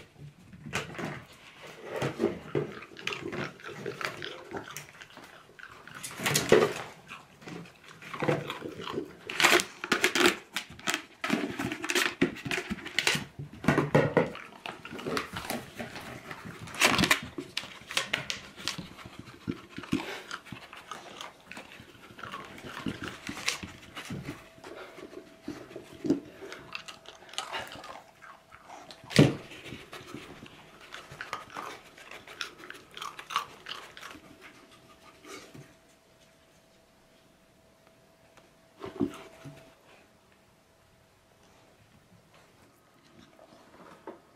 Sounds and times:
Inside, small room: 0.0 - 44.3.

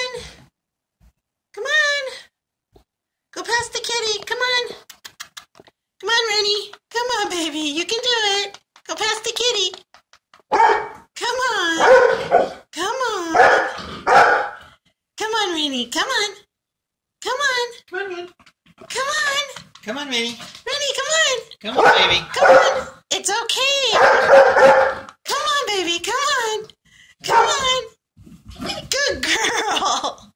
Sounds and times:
Speech: 0.0 - 0.4, 1.6 - 2.3, 3.3 - 4.8, 6.0 - 9.8, 11.2 - 12.0, 12.7 - 13.5, 15.2 - 16.5, 17.2 - 24.3, 25.3 - 28.0, 28.6 - 30.2
Bow-wow: 10.5 - 11.0, 11.8 - 12.6, 13.4 - 14.7, 21.8 - 23.0, 24.0 - 25.1.

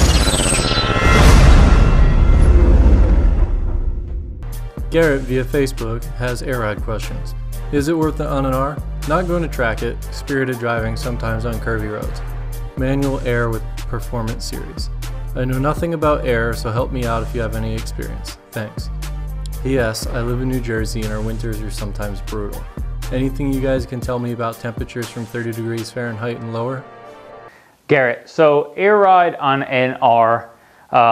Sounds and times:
Music: 0.0 - 27.6
Speech: 4.9 - 12.2, 12.8 - 18.9, 19.5 - 26.8, 27.9 - 31.1.

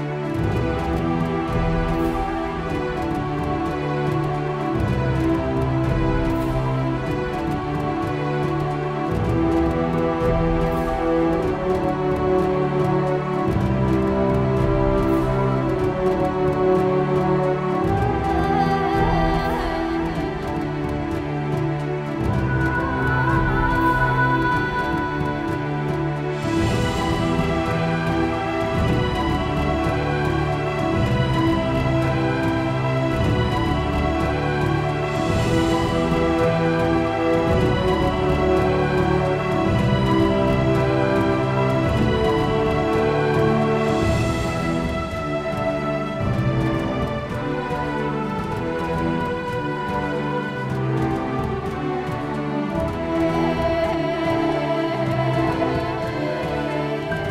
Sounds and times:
Music: 0.0 - 57.3.

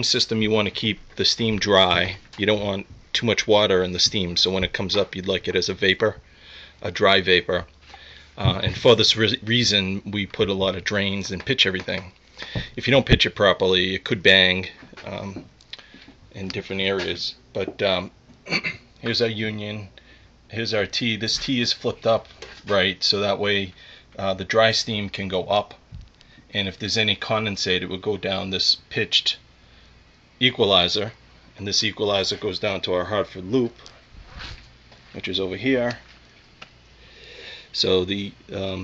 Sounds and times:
Speech: 0.0 - 6.2, 6.8 - 7.7, 8.4 - 12.2, 12.8 - 15.4, 16.4 - 18.2, 19.0 - 19.9, 20.5 - 25.8, 26.5 - 29.4, 30.4 - 33.8, 35.2 - 36.0, 37.8 - 38.8.

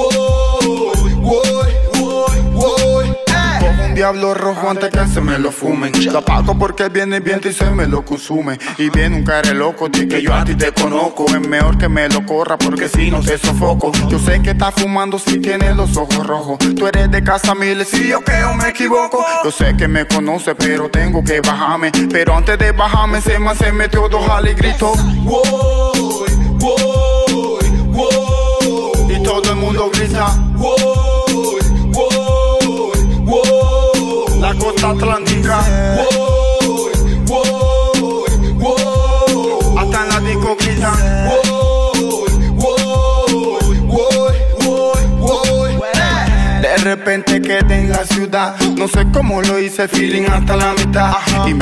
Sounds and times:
Afrobeat: 0.0 - 51.6.

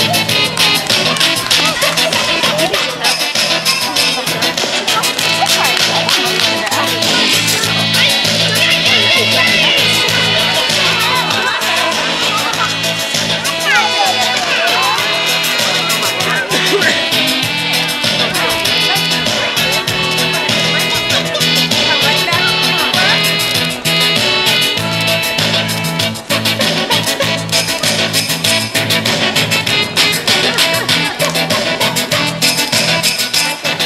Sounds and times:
Music: 0.0 - 33.8
Speech: 0.0 - 33.8.

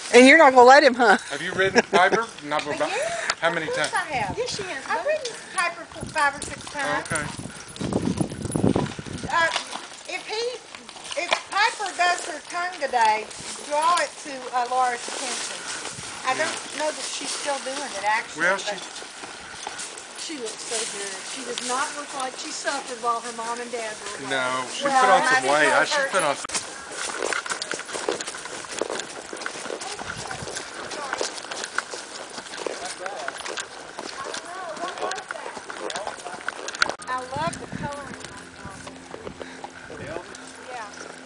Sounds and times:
Clip-clop: 0.0 - 41.2.

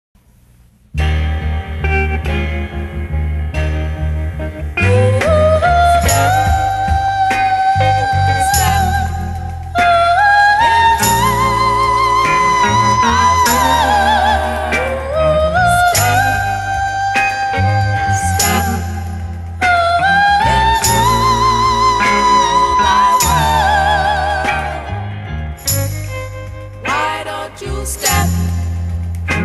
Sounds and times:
Theremin: 4.8 - 25.3.

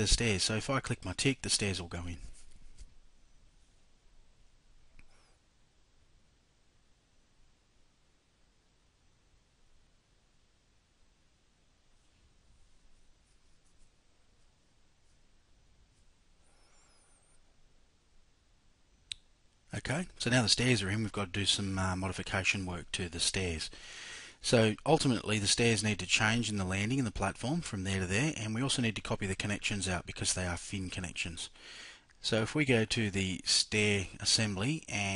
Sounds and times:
Speech: 0.0 - 2.4, 19.7 - 23.8, 24.4 - 31.6, 32.2 - 35.1.

